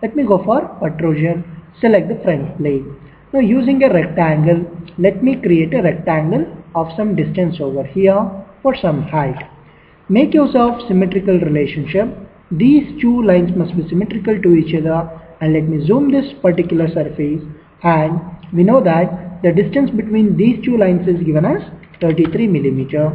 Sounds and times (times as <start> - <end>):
Speech: 0.0 - 9.5, 10.1 - 23.1.